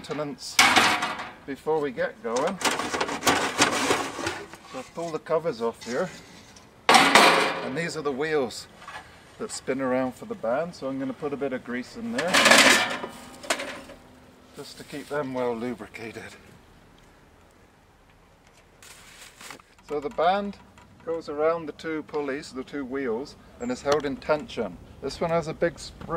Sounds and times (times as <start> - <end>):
Speech: 0.0 - 0.7, 1.5 - 2.6, 4.7 - 6.2, 7.6 - 8.7, 9.4 - 12.5, 14.5 - 16.5, 19.8 - 26.1.